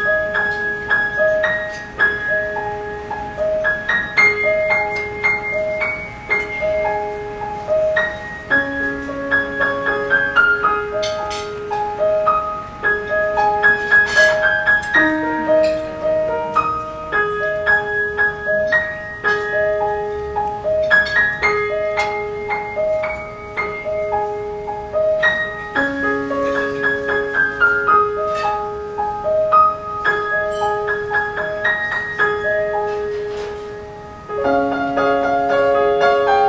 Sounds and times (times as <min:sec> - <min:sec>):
Music: 0:00.0 - 0:36.4.